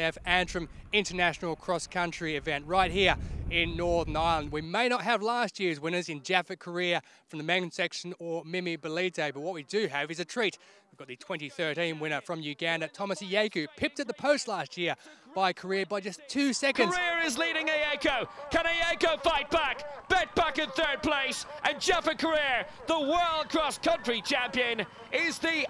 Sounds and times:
Speech: 0.0 - 25.6.

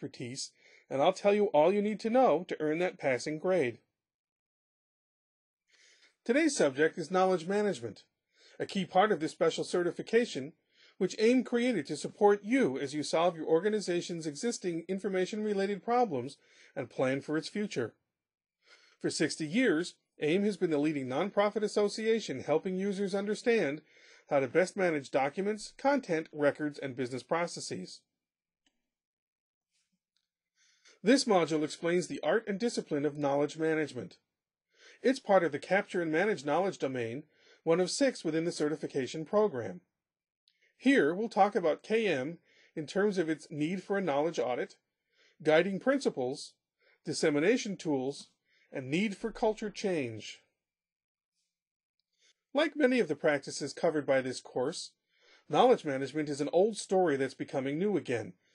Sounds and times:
Speech: 0.0 - 3.9, 6.2 - 18.0, 19.0 - 28.1, 31.0 - 34.2, 35.0 - 39.8, 40.8 - 44.8, 45.4 - 50.6, 52.6 - 58.4.

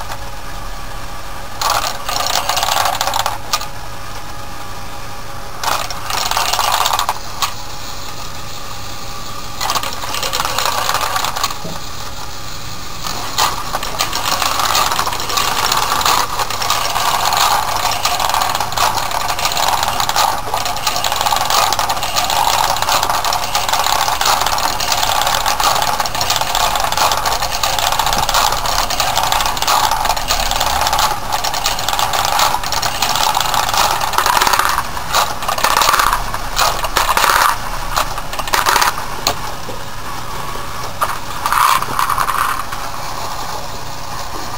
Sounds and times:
Inside, small room: 0.0 - 44.5.

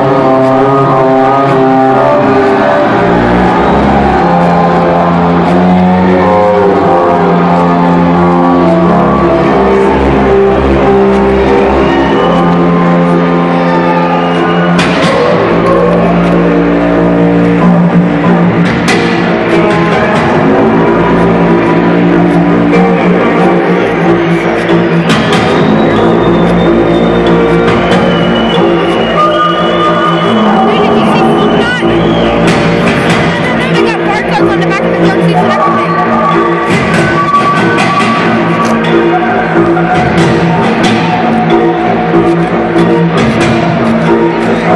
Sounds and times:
Music: 0.0 - 44.7
Speech: 30.4 - 31.9, 33.2 - 36.2.

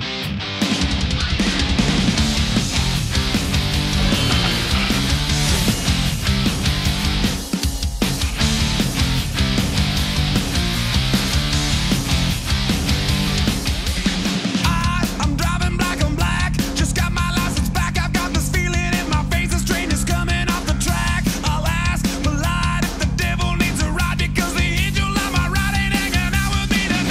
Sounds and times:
Electric guitar: 0.0 - 27.1.

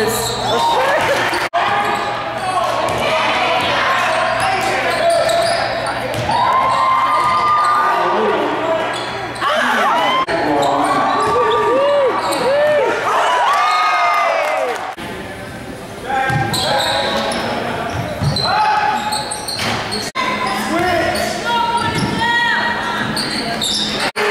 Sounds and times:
Inside, public space: 0.0 - 24.3.

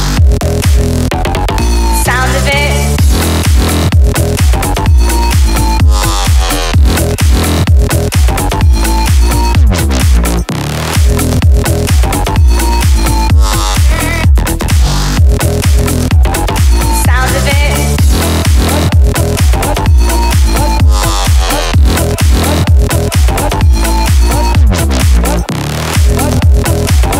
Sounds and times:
Music: 0.0 - 27.1
Sound effect: 0.0 - 27.1.

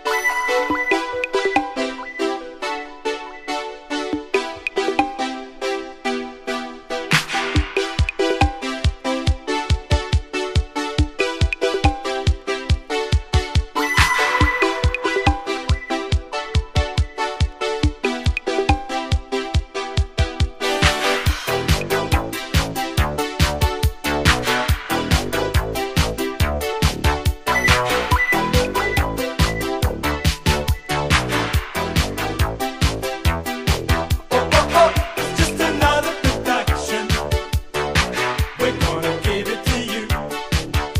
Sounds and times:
Music: 0.0 - 41.0.

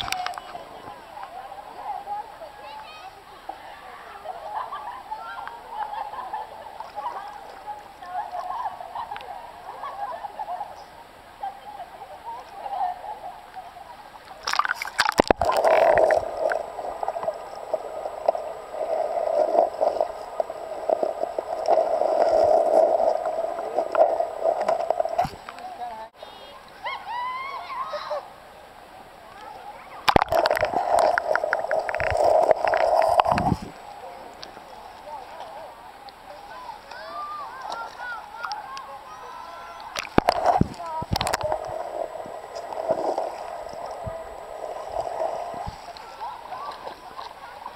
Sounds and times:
Splash, splatter: 14.4 - 16.2.

